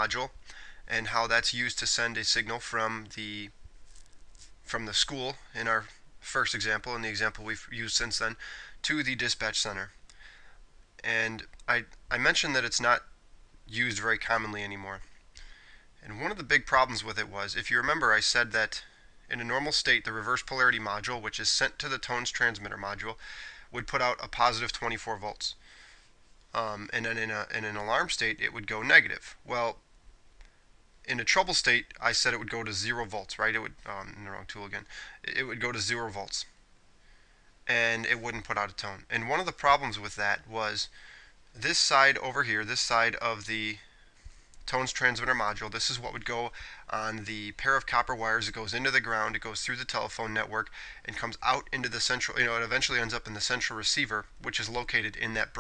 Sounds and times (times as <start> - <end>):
Speech: 0.0 - 3.6, 4.7 - 10.0, 11.0 - 15.1, 16.0 - 25.6, 26.5 - 29.8, 31.1 - 36.6, 37.7 - 41.0, 41.6 - 43.9, 44.7 - 55.6.